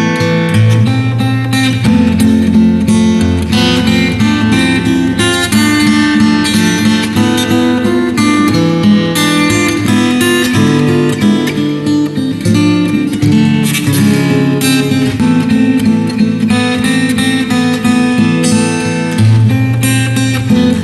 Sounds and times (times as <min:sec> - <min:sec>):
Acoustic guitar: 0:00.0 - 0:20.8
Strum: 0:00.0 - 0:20.8.